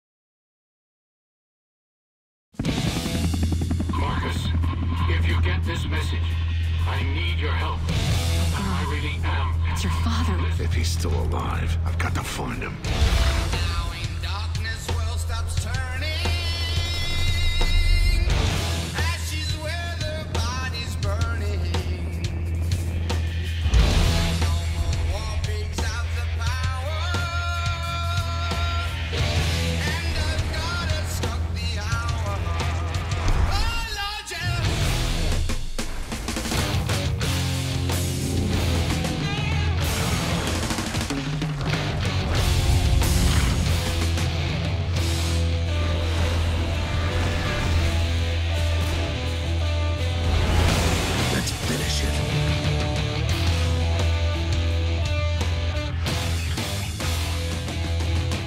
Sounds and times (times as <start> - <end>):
Music: 2.6 - 58.4.